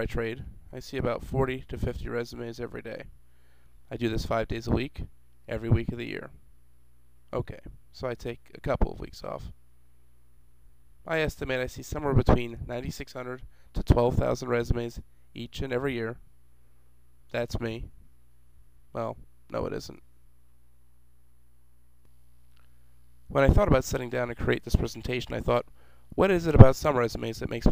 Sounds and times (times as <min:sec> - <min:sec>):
Speech: 0:00.0 - 0:03.1, 0:03.9 - 0:06.4, 0:07.3 - 0:09.6, 0:11.1 - 0:16.2, 0:17.3 - 0:17.9, 0:18.9 - 0:20.0, 0:23.3 - 0:27.7.